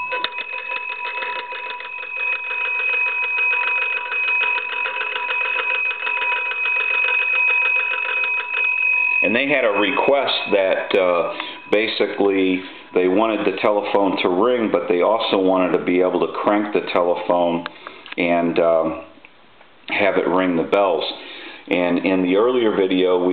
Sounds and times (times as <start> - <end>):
Telephone bell ringing: 0.0 - 14.7
Speech: 9.2 - 19.1, 19.9 - 23.3.